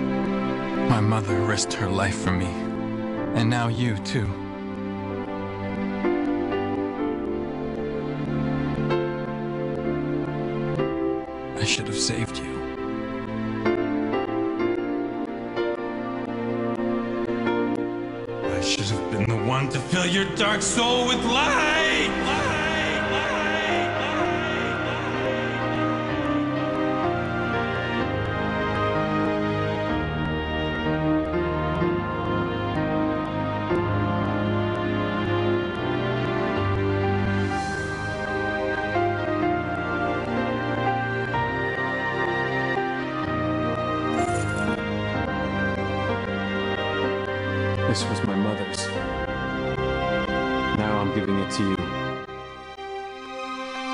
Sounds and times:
Music: 0.0 - 53.9
Speech: 0.9 - 2.6, 3.3 - 4.4, 11.6 - 12.6, 18.5 - 20.4, 47.9 - 49.0, 50.8 - 52.0.

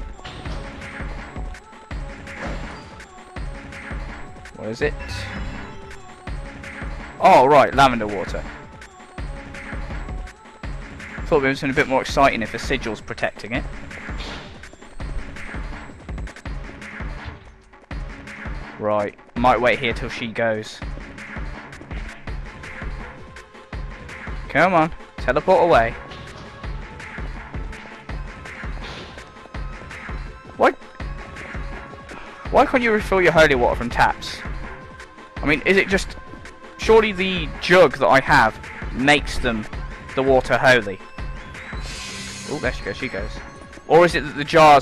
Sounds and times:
Music: 0.0 - 44.8
Speech: 4.6 - 5.3, 7.2 - 8.5, 11.3 - 13.6, 18.8 - 20.8, 24.5 - 26.0, 32.5 - 34.4, 35.4 - 36.2, 36.8 - 41.0, 42.5 - 44.8.

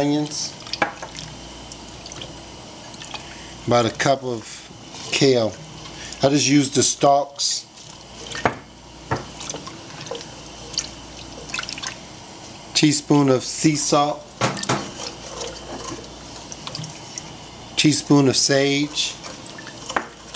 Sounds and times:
Speech: 0.0 - 0.6, 3.7 - 5.6, 6.2 - 7.7, 12.8 - 14.3, 17.8 - 19.3
Water tap, faucet: 0.0 - 3.5, 4.9 - 20.3
Water: 0.0 - 4.1, 4.9 - 13.0, 13.6 - 20.3.

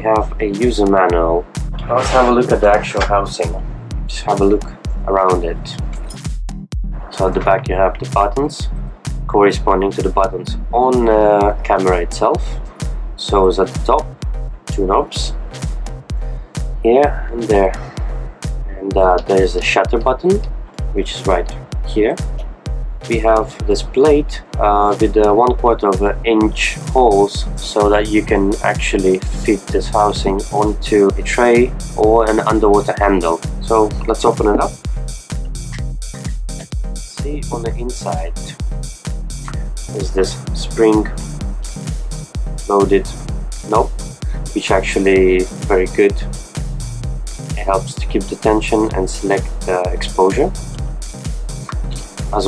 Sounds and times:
Speech: 0.0 - 5.8, 7.1 - 8.7, 9.3 - 12.6, 13.2 - 14.1, 14.7 - 15.4, 16.8 - 18.0, 18.7 - 22.2, 23.1 - 34.8, 37.1 - 38.6, 39.9 - 41.2, 42.7 - 43.9, 44.5 - 46.3, 47.6 - 50.6
Music: 0.0 - 52.4.

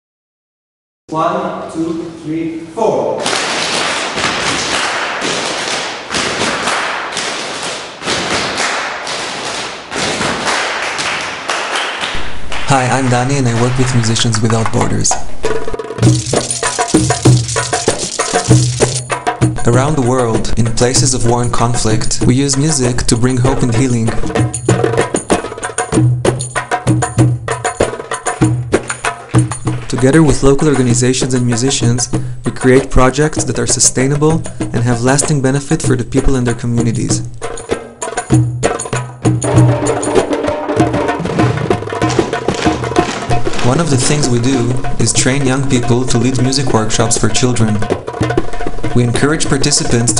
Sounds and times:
Speech: 1.1 - 3.2, 12.7 - 15.2, 19.6 - 24.3, 29.9 - 37.3, 43.6 - 47.9, 49.0 - 50.1
Traditional music: 3.2 - 50.1.

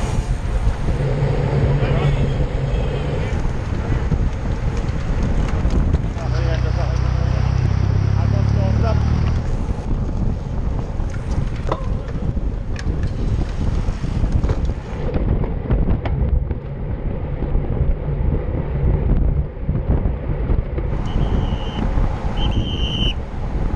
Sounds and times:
Bicycle: 0.0 - 23.7
Outside, urban or manmade: 0.0 - 23.7.

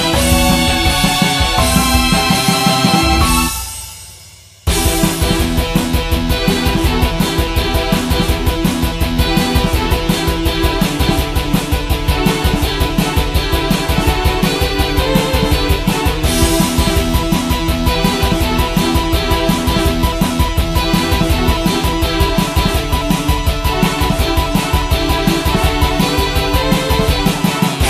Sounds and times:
Video game music: 0.0 - 4.0, 4.7 - 27.9.

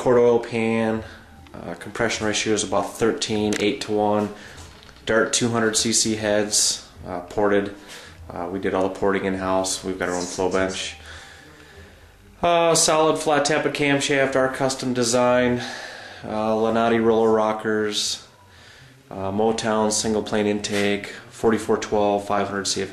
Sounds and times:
Speech: 0.0 - 4.4, 5.1 - 11.0, 12.4 - 15.7, 16.3 - 18.3, 19.1 - 22.9.

